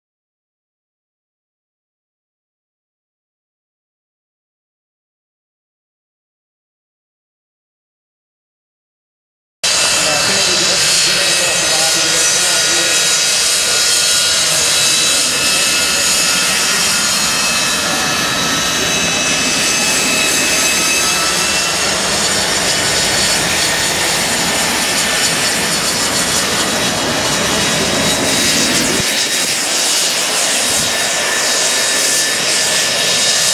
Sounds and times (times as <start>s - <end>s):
Aircraft engine: 9.6s - 33.5s
Fixed-wing aircraft, airplane: 9.6s - 33.5s
Speech: 9.8s - 21.8s.